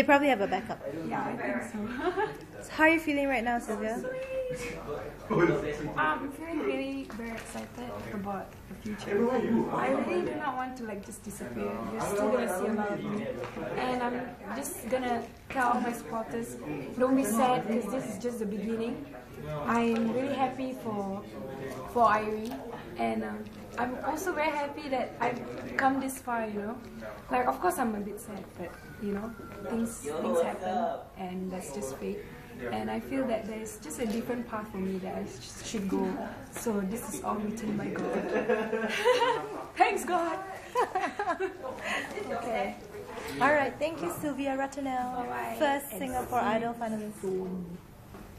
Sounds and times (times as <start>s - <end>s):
Female speech, woman speaking: 0.0s - 4.8s, 5.9s - 38.3s, 39.6s - 47.8s.